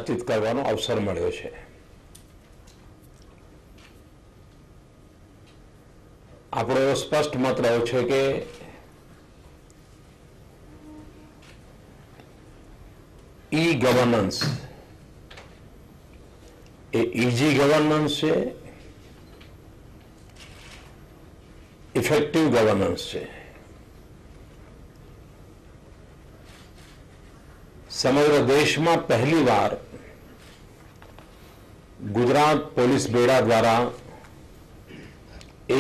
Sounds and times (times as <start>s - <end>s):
Male speech, man speaking: 0.0s - 1.7s, 6.6s - 8.6s, 13.6s - 14.7s, 17.0s - 18.6s, 22.0s - 23.5s, 27.9s - 29.9s, 32.0s - 34.1s
Narration, monologue: 0.0s - 35.8s.